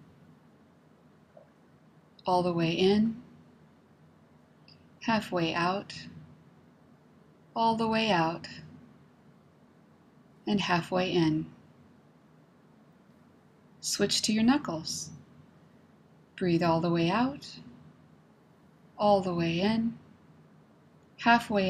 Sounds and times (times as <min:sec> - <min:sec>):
Speech: 0:02.2 - 0:03.2, 0:05.0 - 0:06.1, 0:07.6 - 0:08.7, 0:10.5 - 0:11.6, 0:13.8 - 0:15.2, 0:16.4 - 0:17.6, 0:19.0 - 0:20.0, 0:21.2 - 0:21.7.